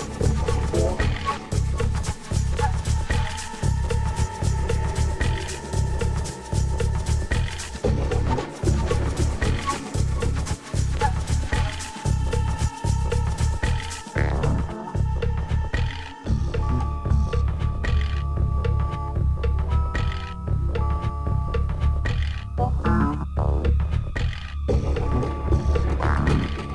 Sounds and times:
Music: 0.0 - 26.7.

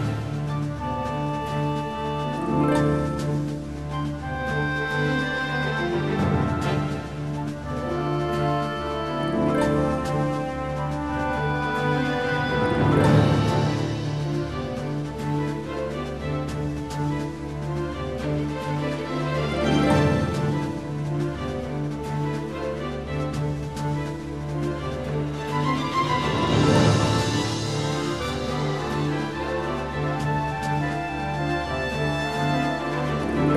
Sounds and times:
Background music: 0.0 - 33.5
Theme music: 0.0 - 33.5.

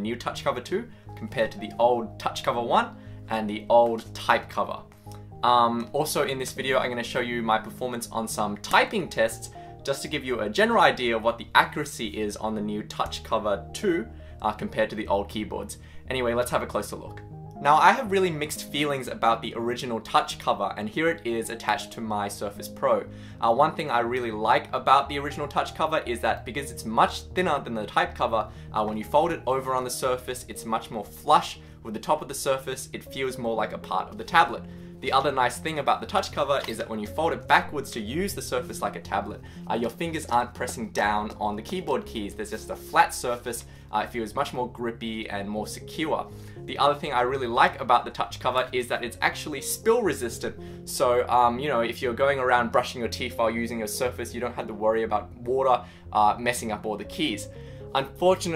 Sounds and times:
Music: 0.0 - 58.5
Speech: 0.0 - 58.5.

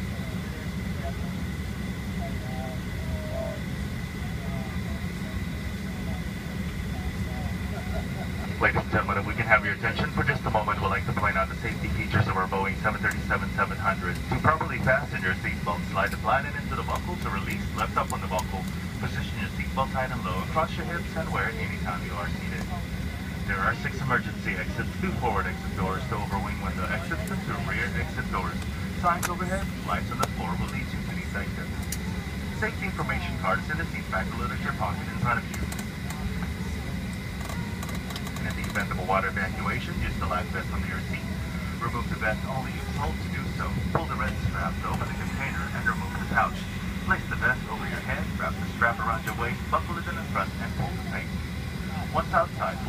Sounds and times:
Aircraft: 0.0 - 52.8
Speech: 4.2 - 37.0, 38.3 - 52.8.

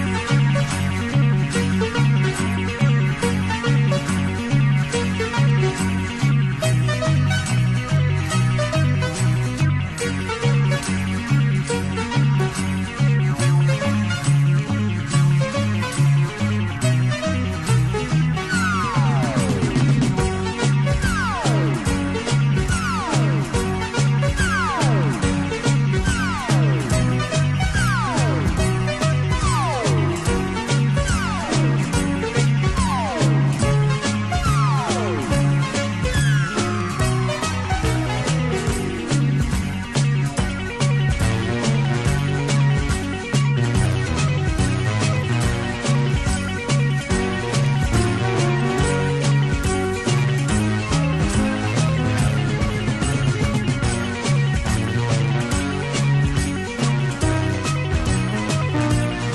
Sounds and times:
Music: 0.0 - 59.3.

